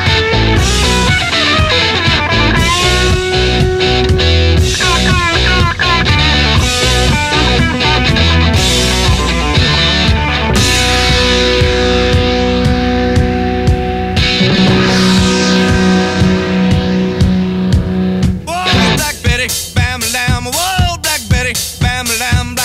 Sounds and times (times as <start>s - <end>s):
Heavy metal: 0.0s - 22.6s.